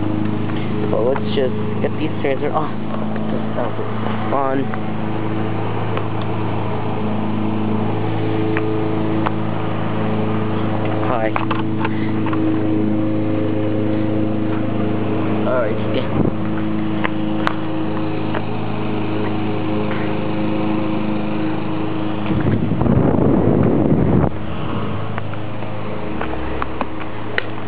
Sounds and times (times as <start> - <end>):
Mechanical fan: 0.0 - 27.6
Speech: 0.9 - 2.8, 3.6 - 4.7, 11.0 - 11.4, 15.4 - 16.2.